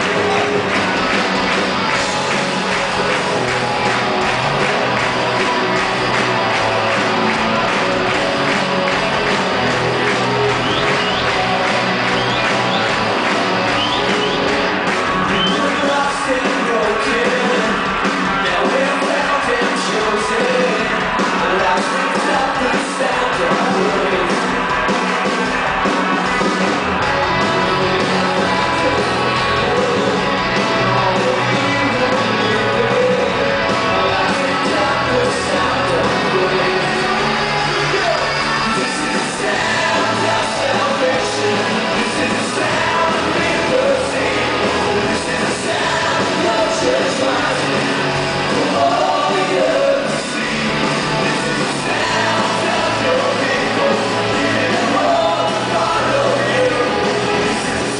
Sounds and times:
Music: 0:00.0 - 0:57.9.

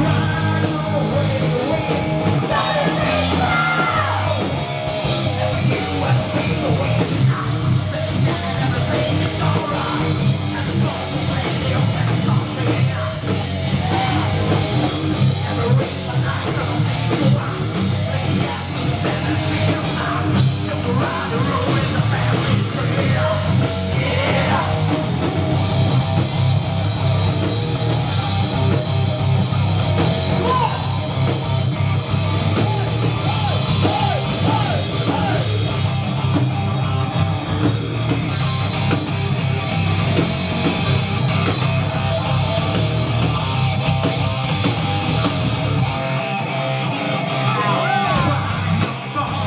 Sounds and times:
Bass drum: 0:00.0 - 0:46.2
Bass guitar: 0:00.0 - 0:49.4
Drum kit: 0:00.0 - 0:49.4
Electric guitar: 0:00.0 - 0:49.4.

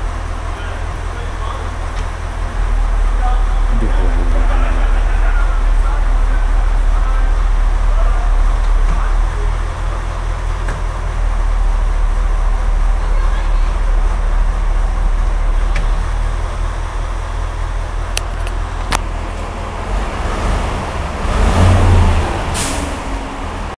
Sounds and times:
Vehicle: 0:00.0 - 0:23.7
Accelerating, revving, vroom: 0:19.8 - 0:23.7.

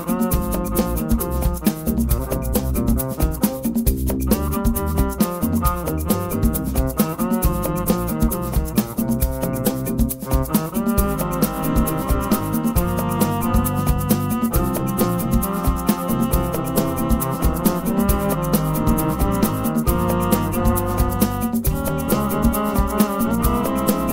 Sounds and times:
Cello: 0:07.0 - 0:24.1.

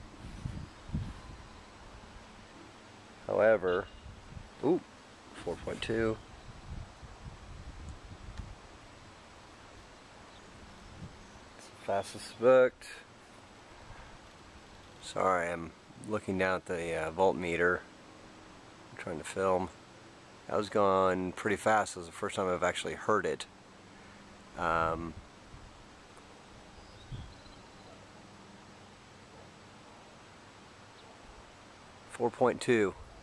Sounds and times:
Speech: 0:03.3 - 0:03.9, 0:04.6 - 0:04.8, 0:05.4 - 0:06.2, 0:11.8 - 0:13.1, 0:15.0 - 0:17.9, 0:19.0 - 0:19.7, 0:20.5 - 0:23.5, 0:24.6 - 0:25.2, 0:32.1 - 0:33.0.

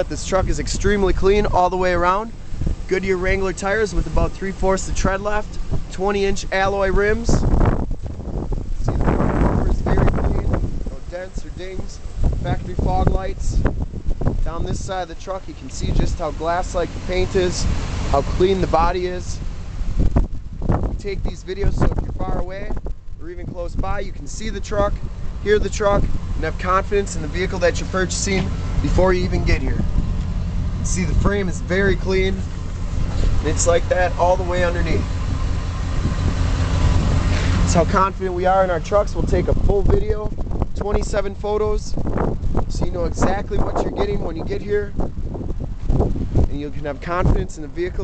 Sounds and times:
Speech: 0:00.0 - 0:02.3, 0:02.9 - 0:07.5, 0:08.8 - 0:13.7, 0:14.4 - 0:19.4, 0:21.0 - 0:29.9, 0:30.8 - 0:32.5, 0:33.4 - 0:35.1, 0:37.7 - 0:42.0, 0:42.7 - 0:45.0, 0:46.5 - 0:48.0
Vehicle: 0:00.0 - 0:48.0.

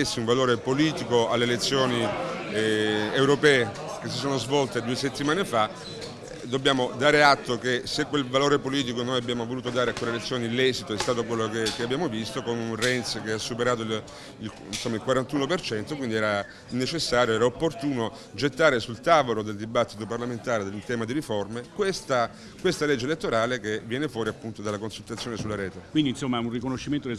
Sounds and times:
Speech: 0:00.0 - 0:27.1.

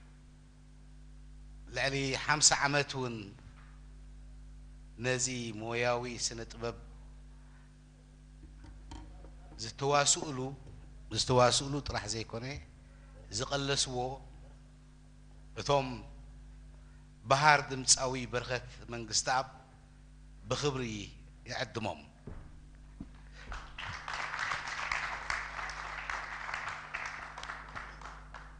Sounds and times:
Speech: 0:01.7 - 0:03.4, 0:05.0 - 0:06.9, 0:09.2 - 0:14.3, 0:15.6 - 0:16.2, 0:17.3 - 0:19.6, 0:20.5 - 0:22.2.

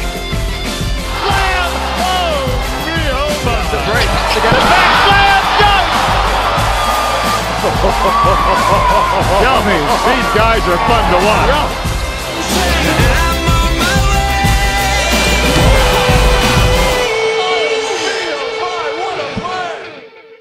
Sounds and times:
Music: 0:00.0 - 0:20.4.

